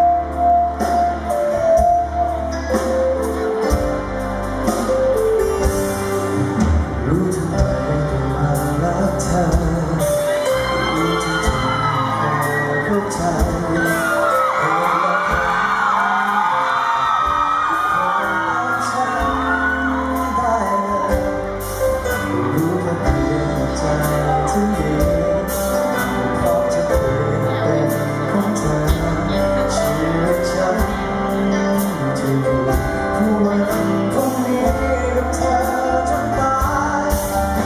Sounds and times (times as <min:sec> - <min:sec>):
Music: 0:00.0 - 0:37.6.